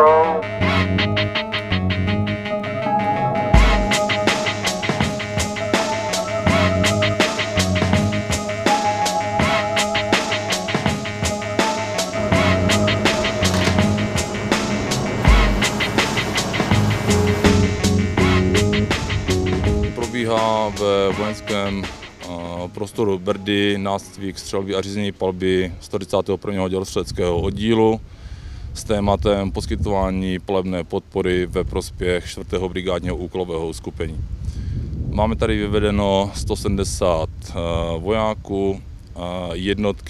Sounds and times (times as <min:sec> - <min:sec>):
Outside, rural or natural: 0:00.0 - 0:40.0
Music: 0:00.1 - 0:24.5
Speech: 0:20.0 - 0:28.0, 0:28.8 - 0:34.2, 0:35.1 - 0:40.0.